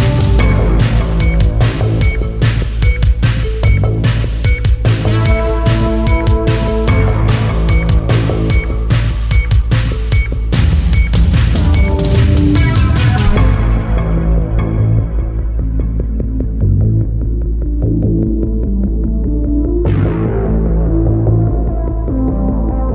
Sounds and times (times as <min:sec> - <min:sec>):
Soundtrack music: 0:00.0 - 0:22.9.